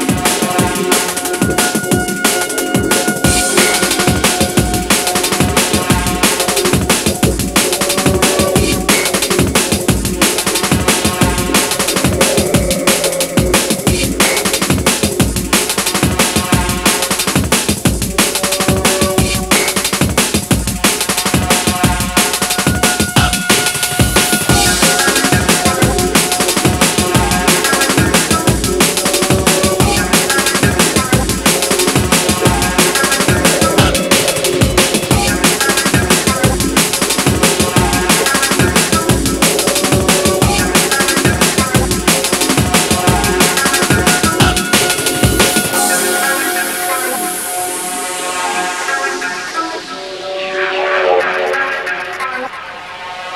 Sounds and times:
Bass drum: 0:00.0 - 0:46.0
Drum kit: 0:00.0 - 0:52.4.

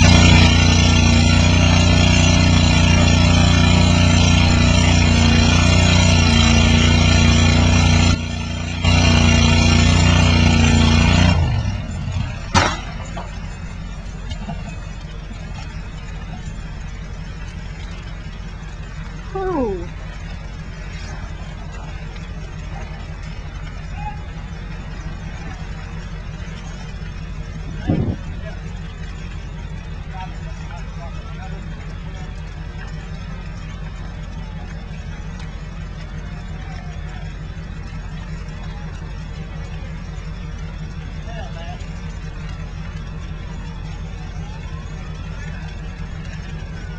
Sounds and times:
Crackle: 0:00.0 - 0:46.9
Speech: 0:19.3 - 0:19.9, 0:30.1 - 0:31.7, 0:41.2 - 0:41.8.

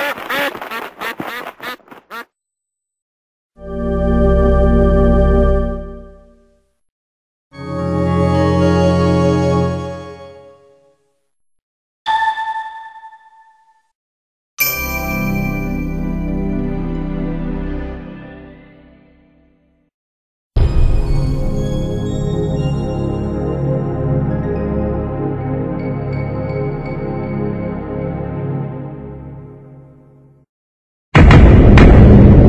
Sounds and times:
Music: 0:03.6 - 0:06.8, 0:07.6 - 0:11.2, 0:14.6 - 0:19.9, 0:20.6 - 0:30.5.

